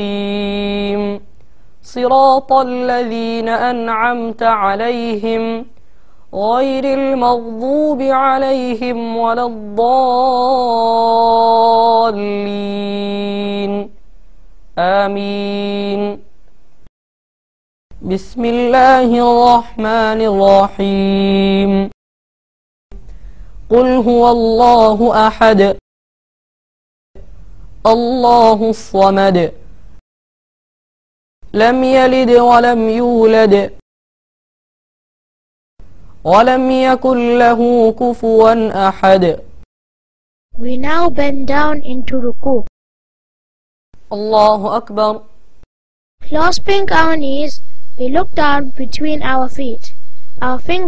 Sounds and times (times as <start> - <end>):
Speech: 27.9 - 29.6, 31.6 - 33.8, 36.3 - 39.5, 40.6 - 42.7, 44.1 - 45.3, 46.2 - 50.8.